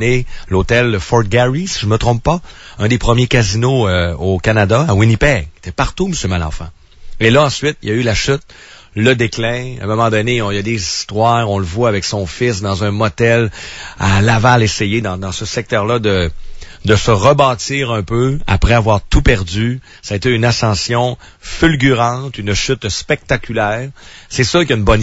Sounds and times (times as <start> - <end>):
Speech: 0.0 - 25.0.